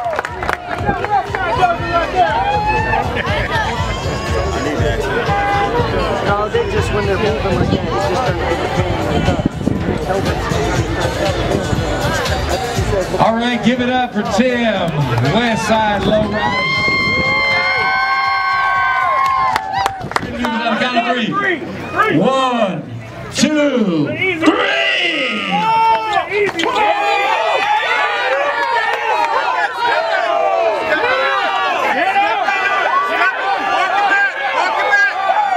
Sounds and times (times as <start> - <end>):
Music: 0.1 - 20.2.